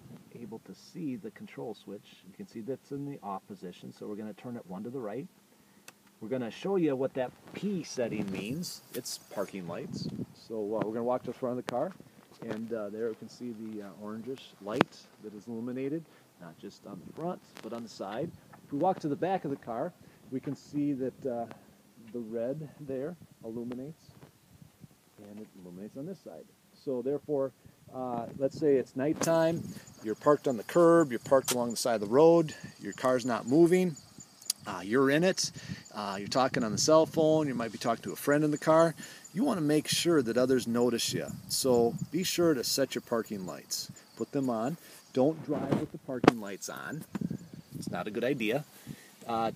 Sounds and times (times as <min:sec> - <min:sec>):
Speech: 0:00.3 - 0:05.3, 0:06.2 - 0:24.1, 0:25.2 - 0:47.1, 0:47.8 - 0:49.5.